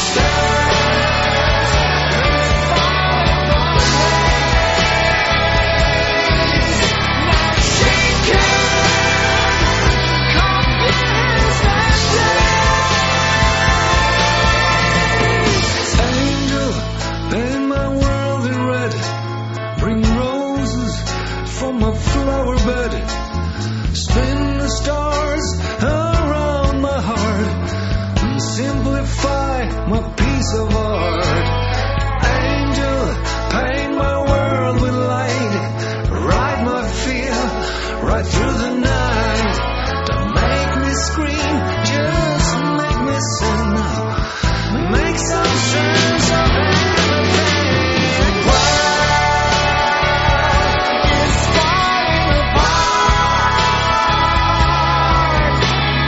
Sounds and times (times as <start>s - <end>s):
Progressive rock: 0.0s - 56.0s.